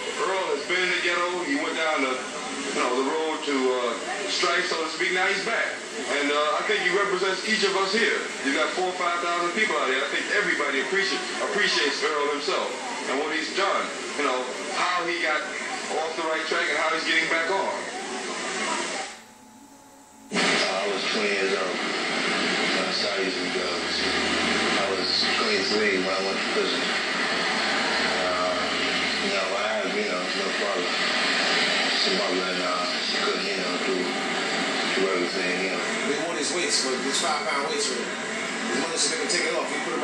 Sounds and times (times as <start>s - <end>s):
Speech: 0.0s - 19.3s, 20.4s - 21.8s, 24.8s - 26.9s, 35.0s - 40.0s.